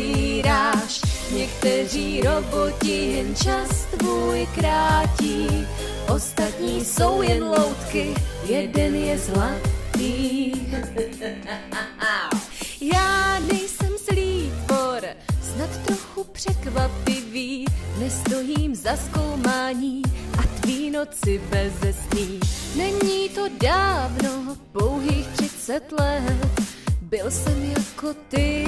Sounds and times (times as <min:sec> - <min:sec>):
Music: 0:00.0 - 0:28.6.